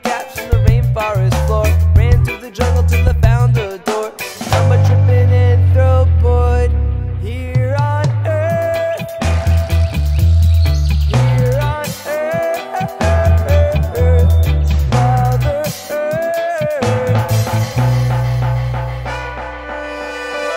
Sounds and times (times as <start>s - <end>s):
Music: 0.0s - 20.5s
Echo: 3.8s - 10.1s.